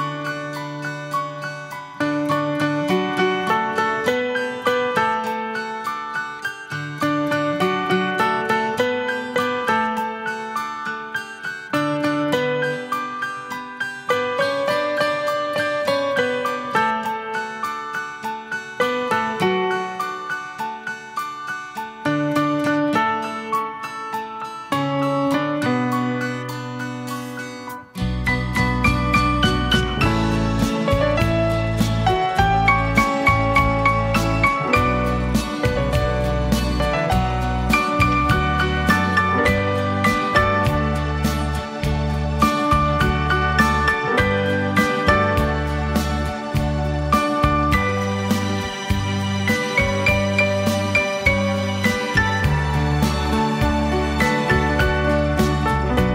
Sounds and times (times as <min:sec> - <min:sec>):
Music: 0:00.0 - 0:56.1.